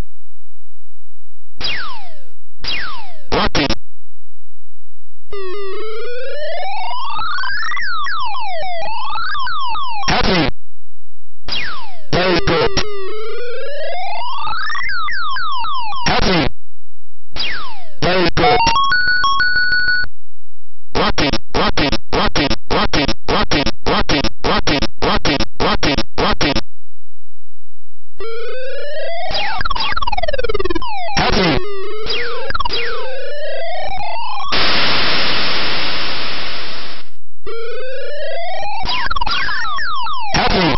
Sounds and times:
White noise: 34.5 - 37.2.

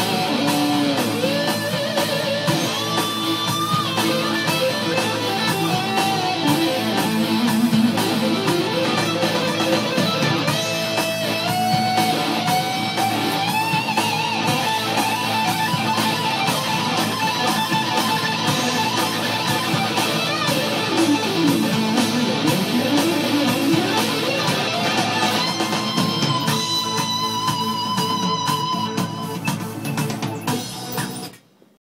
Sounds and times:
Electric guitar: 0.0 - 31.6.

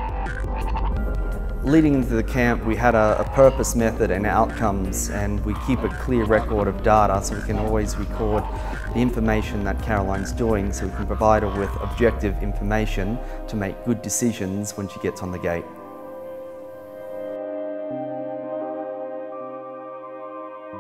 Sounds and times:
Ambient music: 0.0 - 20.8.

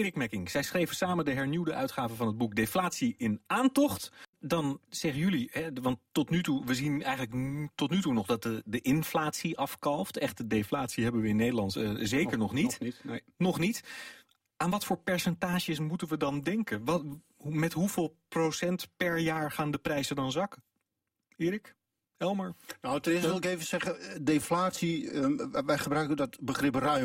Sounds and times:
Speech: 0.0 - 13.8, 21.4 - 27.0.

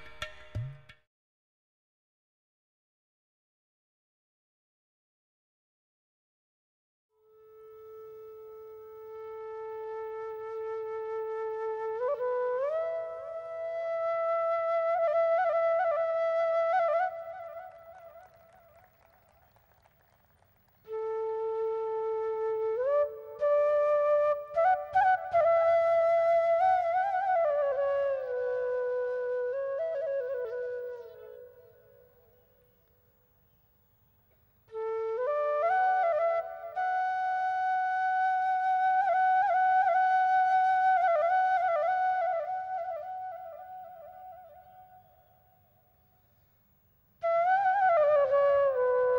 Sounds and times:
Music: 0.0 - 1.1, 7.1 - 19.1, 20.8 - 33.2, 34.7 - 45.7, 47.2 - 49.1.

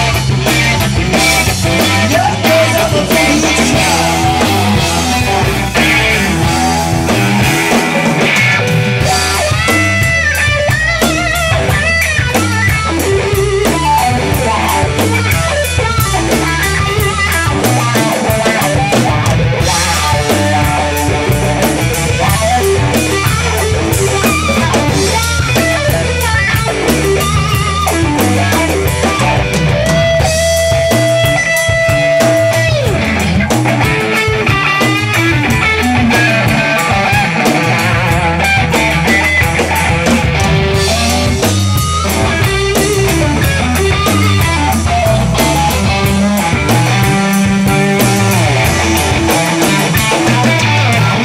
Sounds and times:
Angry music: 0.0 - 51.2
Blues: 0.0 - 51.2
Progressive rock: 0.0 - 51.2
Punk rock: 0.0 - 51.2
Rock and roll: 0.0 - 51.2.

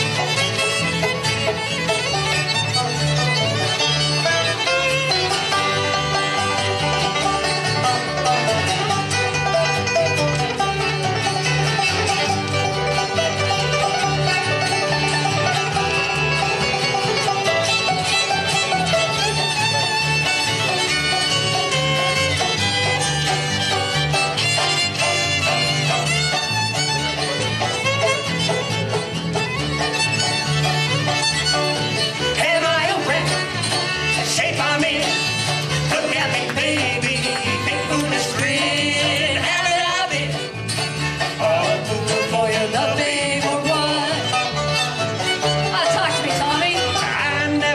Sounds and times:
Banjo: 0.0 - 47.7
Bluegrass: 0.0 - 47.7
Guitar: 0.0 - 47.7.

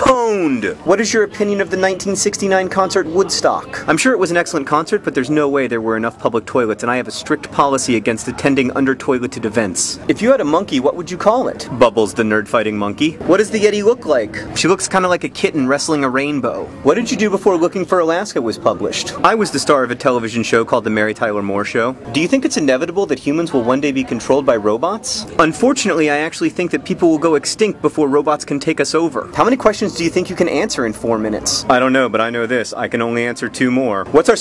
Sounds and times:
Speech: 0.0 - 34.4.

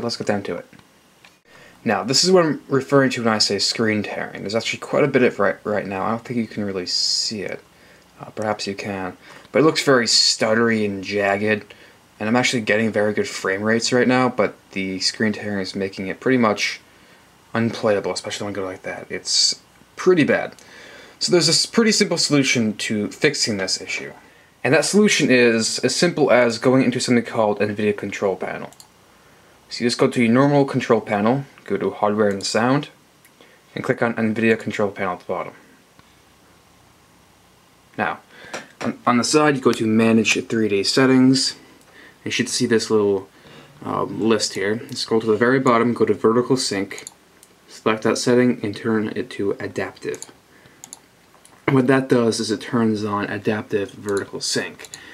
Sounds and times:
Speech: 0.0 - 0.8, 1.8 - 16.9, 17.5 - 20.6, 21.2 - 28.8, 29.7 - 33.0, 33.7 - 35.7, 38.0 - 41.6, 42.2 - 50.4, 51.6 - 55.1.

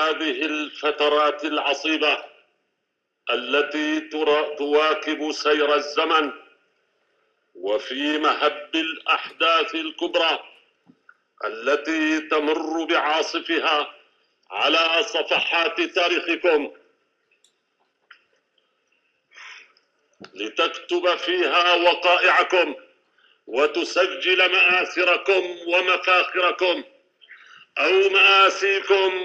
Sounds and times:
Male speech, man speaking: 0.0 - 2.3, 3.3 - 6.4, 7.6 - 10.5, 11.4 - 13.9, 14.5 - 16.8, 20.2 - 22.8, 23.5 - 26.9, 27.8 - 29.2
Narration, monologue: 0.0 - 29.2.

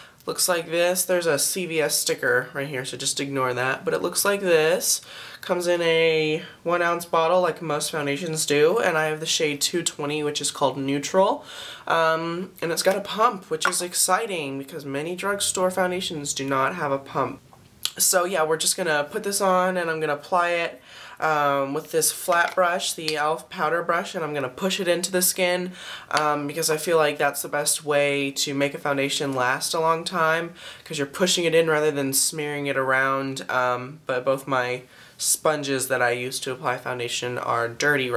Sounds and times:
Speech: 0.3 - 38.1.

